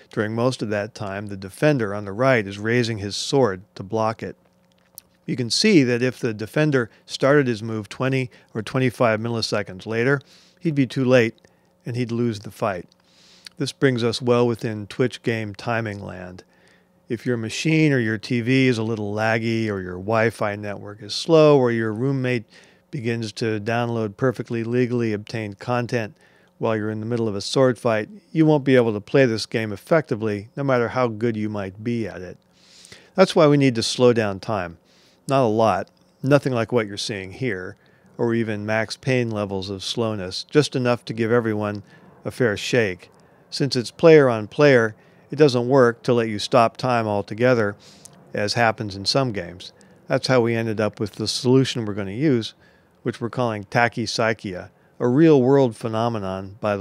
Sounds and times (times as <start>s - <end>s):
Speech: 0.0s - 4.4s, 5.2s - 12.9s, 13.5s - 16.5s, 17.1s - 32.4s, 33.1s - 56.8s.